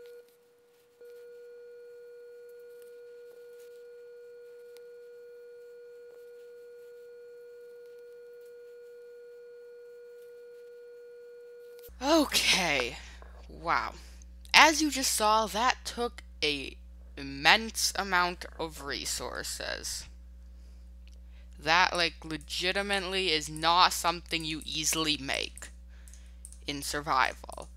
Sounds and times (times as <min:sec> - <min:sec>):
Speech: 0:12.0 - 0:20.1, 0:21.6 - 0:25.7, 0:26.7 - 0:27.7.